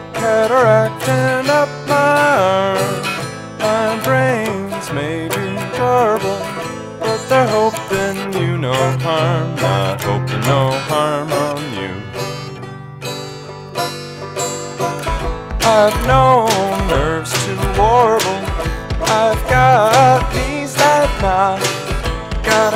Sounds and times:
Mandolin: 0.0 - 22.7.

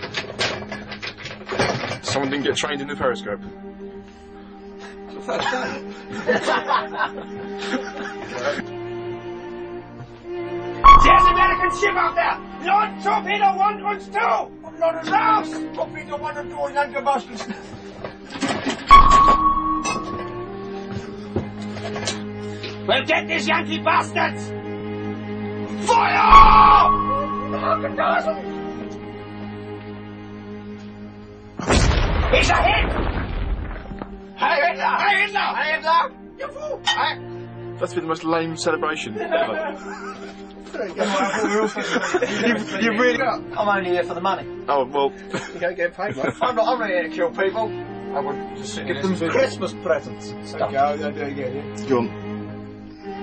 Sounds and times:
Music: 0.0 - 53.2
Speech: 2.0 - 3.4, 11.0 - 17.5, 22.9 - 24.5, 34.4 - 37.2, 42.3 - 52.1.

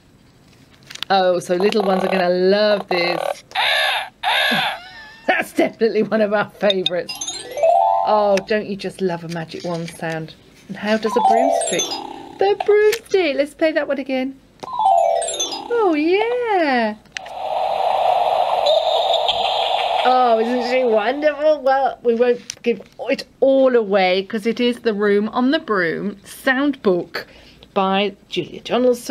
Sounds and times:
Speech: 1.1 - 3.4, 5.3 - 7.1, 8.1 - 11.8, 12.4 - 14.4, 15.7 - 17.0, 20.1 - 29.1.

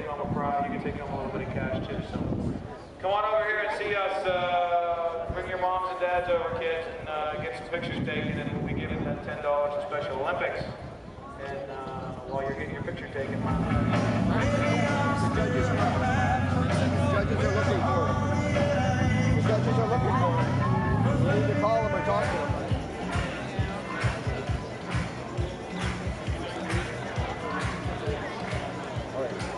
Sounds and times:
Speech: 0.0 - 29.5
Music: 13.2 - 29.5.

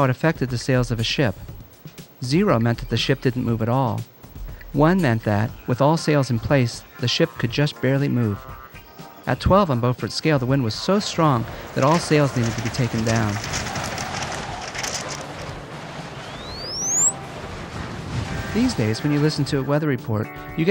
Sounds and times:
Speech: 0.0 - 1.5, 2.2 - 4.0, 4.7 - 8.4, 9.3 - 13.4, 18.5 - 20.7
Music: 0.0 - 13.7, 17.0 - 20.7.

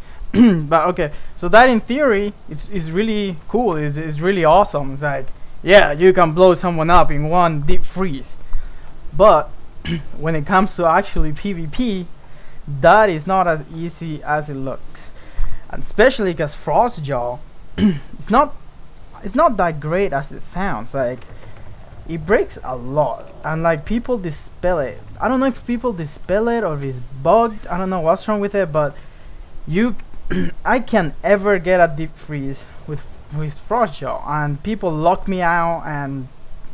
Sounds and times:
Speech: 0.4 - 8.4, 9.2 - 12.1, 12.7 - 18.6, 19.2 - 21.3, 22.1 - 29.0, 29.7 - 36.3.

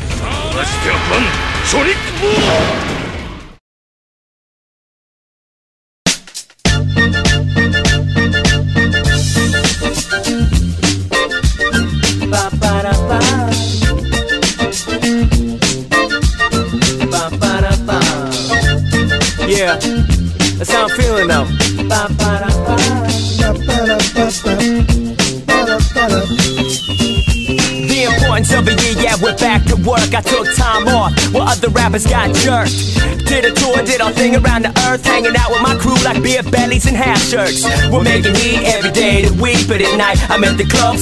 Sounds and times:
Sampler: 20.6 - 31.5.

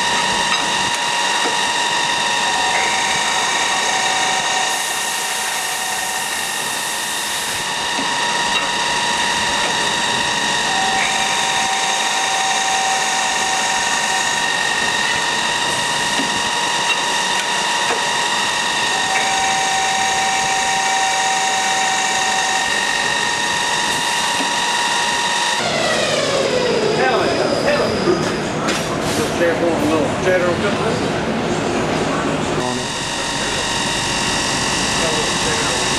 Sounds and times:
Power tool: 0.0 - 28.4, 32.6 - 35.9.

